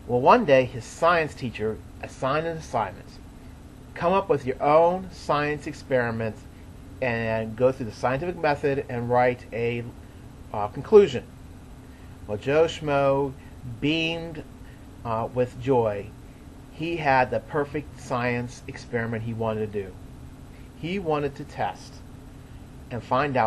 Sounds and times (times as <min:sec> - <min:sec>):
Speech: 0:00.1 - 0:03.2, 0:04.0 - 0:06.4, 0:07.0 - 0:11.3, 0:12.3 - 0:14.4, 0:15.1 - 0:16.1, 0:16.8 - 0:20.0, 0:20.8 - 0:22.0, 0:22.9 - 0:23.4.